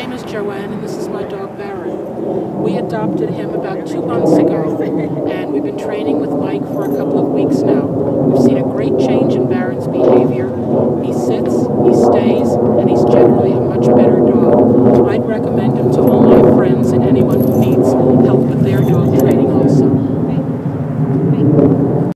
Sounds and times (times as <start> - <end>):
Speech: 0.0 - 2.0, 2.6 - 20.5.